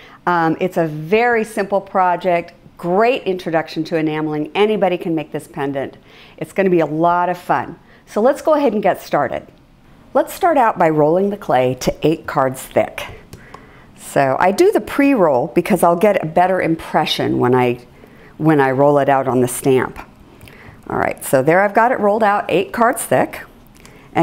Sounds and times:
Speech: 0.3 - 9.6, 10.2 - 13.2, 14.0 - 17.8, 18.4 - 20.1, 20.9 - 23.5.

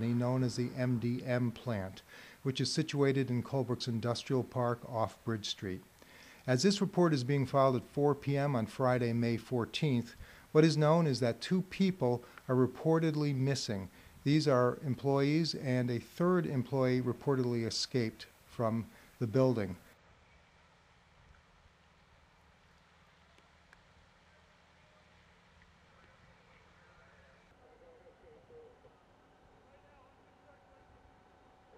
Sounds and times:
Speech: 0.0 - 5.8, 6.4 - 19.9.

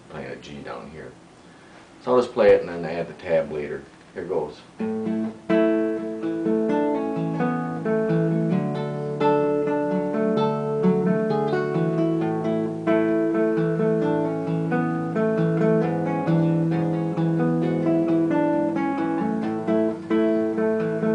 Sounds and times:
Strum: 2.0 - 21.1
Acoustic guitar: 4.7 - 21.1.

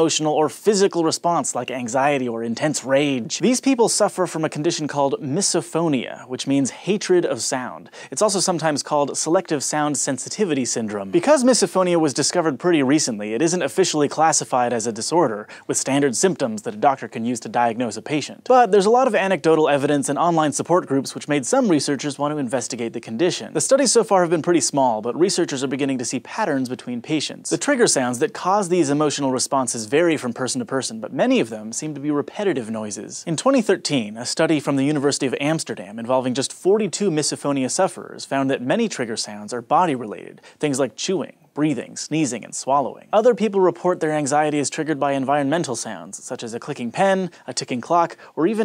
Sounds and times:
Speech: 0.0 - 48.6.

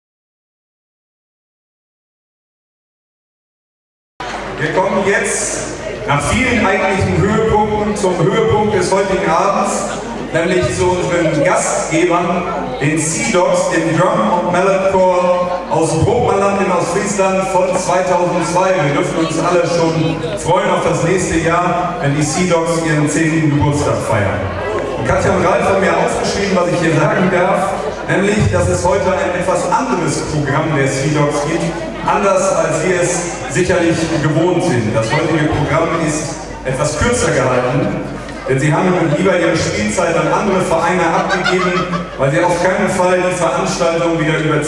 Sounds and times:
Speech: 4.6 - 44.6.

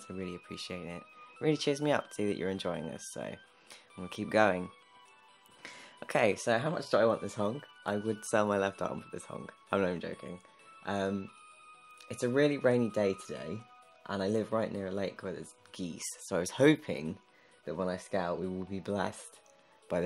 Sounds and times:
Speech: 0.0 - 3.4, 6.0 - 11.3, 12.1 - 19.3
Music: 0.0 - 20.0.

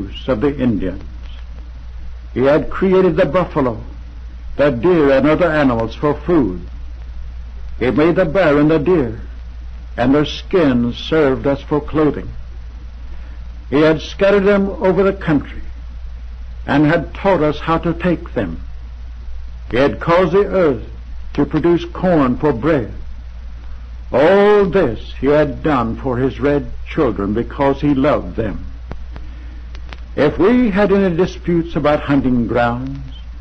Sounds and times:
Male speech, man speaking: 0.0 - 1.1, 2.4 - 3.9, 4.6 - 6.7, 7.8 - 9.3, 10.0 - 12.4, 13.7 - 15.7, 16.7 - 18.6, 19.7 - 23.0, 24.2 - 28.7, 30.2 - 33.2
Narration, monologue: 0.0 - 33.4.

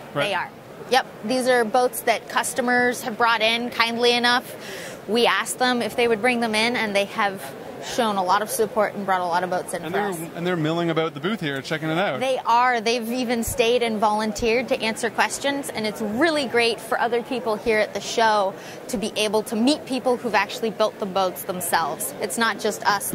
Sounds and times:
Speech: 5.1 - 23.1.

